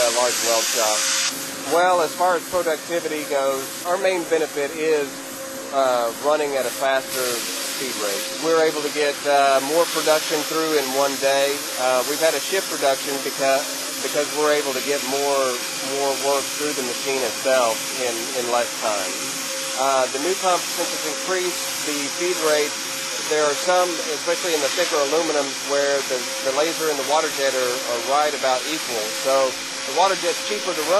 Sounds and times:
Speech: 0.0 - 1.0, 1.7 - 5.1, 5.7 - 19.2, 19.8 - 30.9.

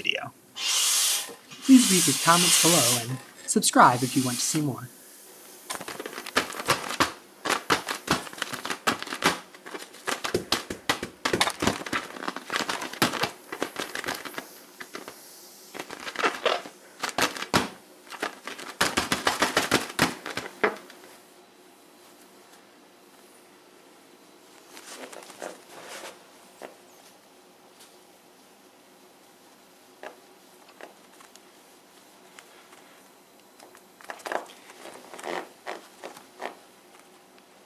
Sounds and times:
Inside, small room: 0.0 - 37.6.

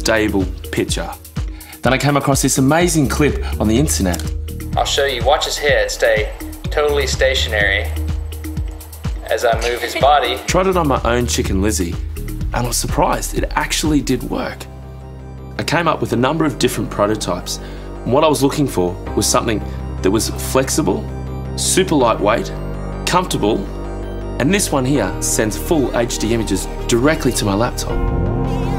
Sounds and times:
Speech: 0.0 - 1.2, 1.8 - 8.0, 9.2 - 14.7, 15.6 - 23.7, 24.4 - 28.0
Music: 0.0 - 28.7.

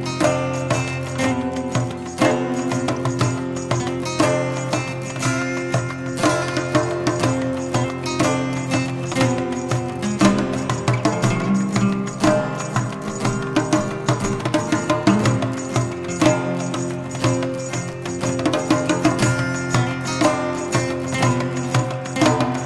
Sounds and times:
Guitar: 0.0 - 22.6.

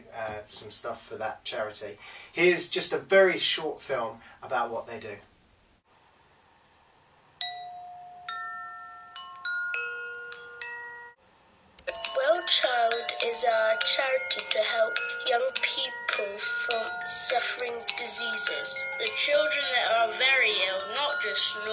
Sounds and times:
Speech: 0.0 - 5.3, 11.9 - 21.7
Chime: 7.4 - 11.2, 11.8 - 21.7.

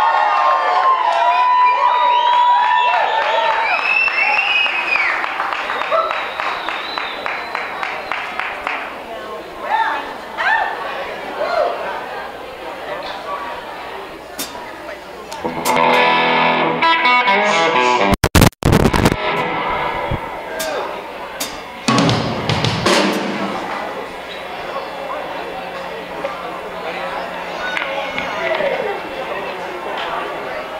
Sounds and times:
Speech: 7.4 - 15.4, 23.5 - 30.7
Music: 15.4 - 18.2, 21.4 - 23.7.

